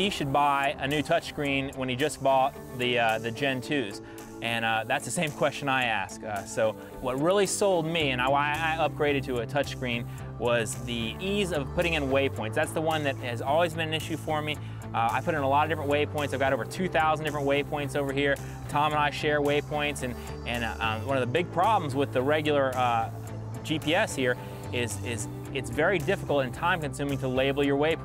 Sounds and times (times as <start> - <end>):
Music: 0.0 - 28.0
Speech: 0.0 - 28.0.